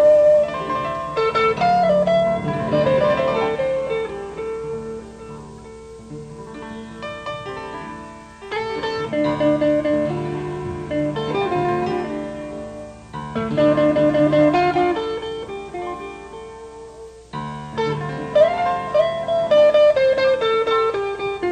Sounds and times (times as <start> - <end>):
Jazz: 0.0 - 21.5.